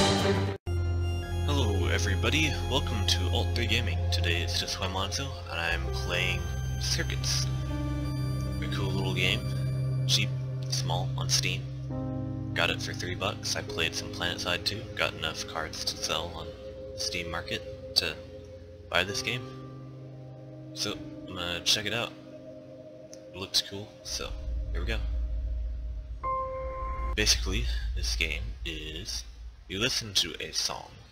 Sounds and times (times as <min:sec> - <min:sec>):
Music: 0:00.0 - 0:29.5
Speech: 0:01.5 - 0:07.5, 0:08.6 - 0:11.7, 0:12.6 - 0:18.3, 0:18.9 - 0:19.6, 0:20.8 - 0:22.2, 0:23.3 - 0:25.1, 0:27.2 - 0:31.1.